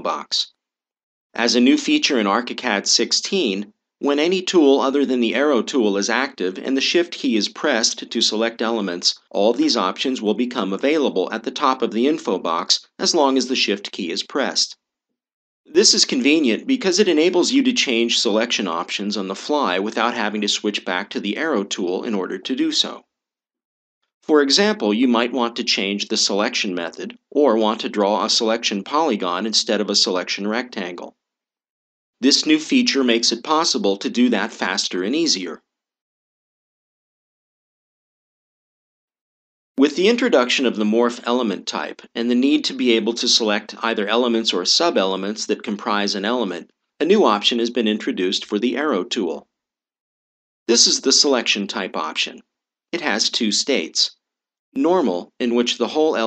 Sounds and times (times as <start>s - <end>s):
Speech: 0.0s - 0.5s, 1.4s - 14.8s, 15.7s - 23.1s, 24.2s - 31.2s, 32.2s - 35.6s, 39.8s - 49.4s, 50.7s - 52.4s, 53.0s - 54.2s, 54.8s - 56.2s.